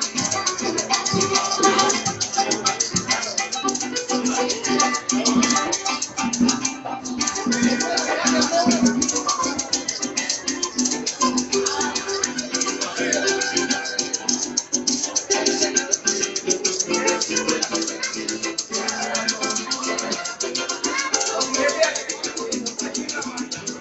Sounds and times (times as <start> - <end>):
Maraca: 0.0 - 23.8.